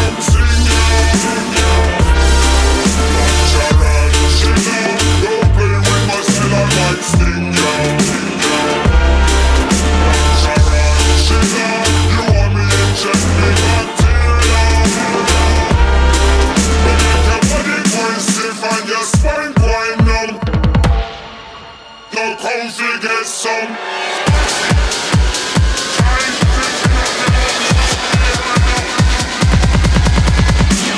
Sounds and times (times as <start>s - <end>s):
Dubstep: 0.0s - 30.9s.